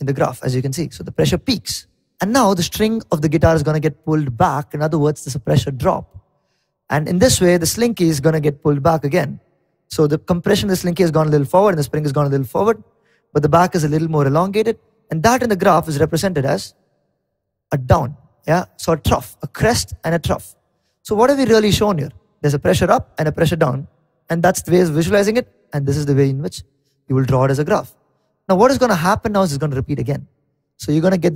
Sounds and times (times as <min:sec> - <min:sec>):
Speech: 0:00.0 - 0:06.2, 0:06.9 - 0:12.8, 0:13.4 - 0:16.8, 0:17.7 - 0:31.3.